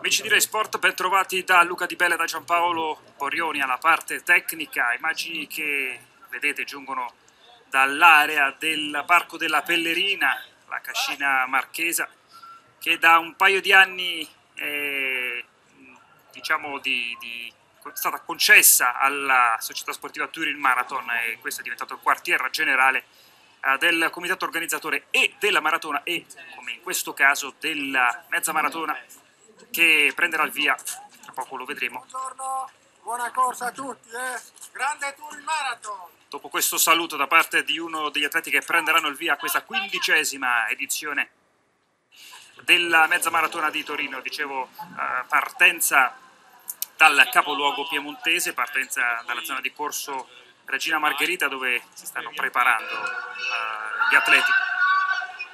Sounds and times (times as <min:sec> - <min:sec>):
Outside, urban or manmade: 0:00.0 - 0:55.5.